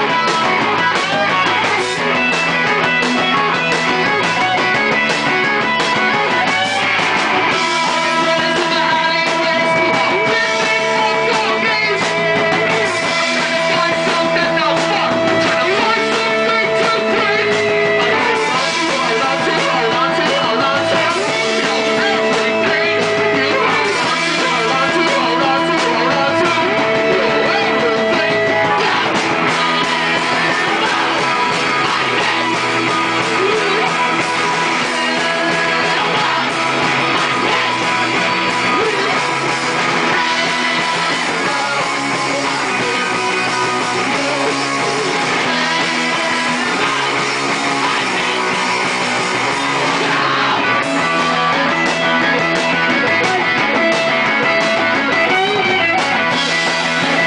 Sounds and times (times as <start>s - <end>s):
Music: 0.0s - 57.2s.